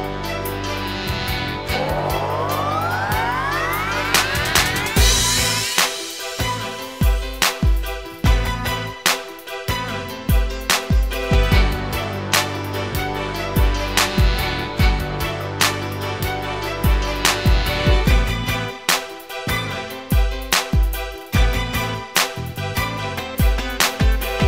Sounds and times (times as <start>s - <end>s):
Music: 0.0s - 24.4s.